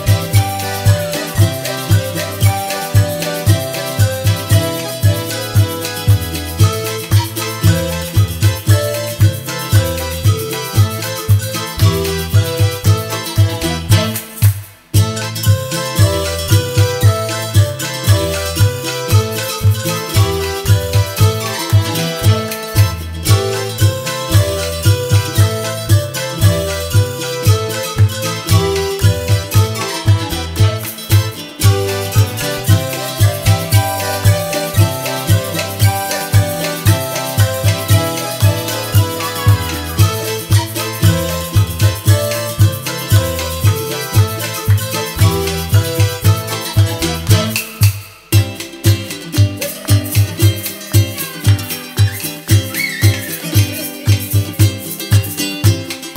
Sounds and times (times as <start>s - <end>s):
Music: 0.0s - 56.1s.